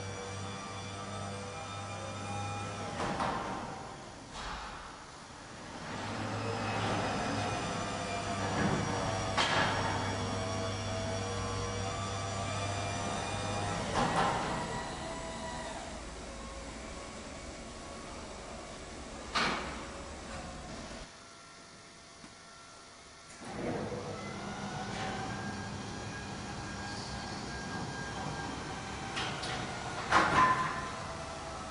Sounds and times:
Sliding door: 0.0 - 21.1, 23.3 - 31.7.

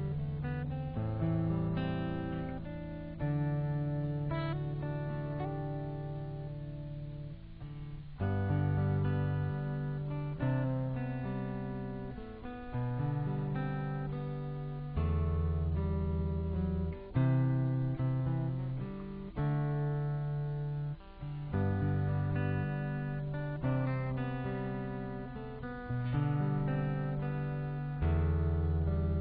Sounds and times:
Guitar: 0.0 - 29.2.

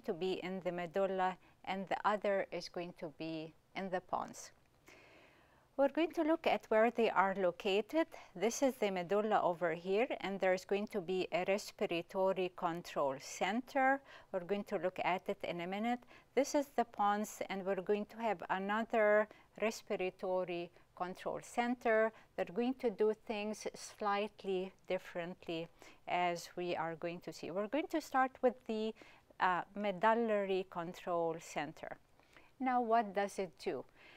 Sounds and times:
Speech: 0.0 - 4.5, 5.8 - 32.0, 32.6 - 33.9.

